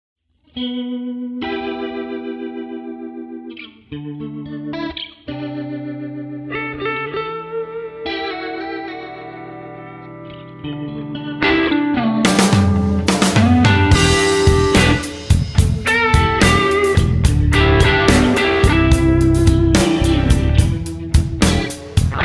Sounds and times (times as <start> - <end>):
Guitar: 0.3 - 22.2.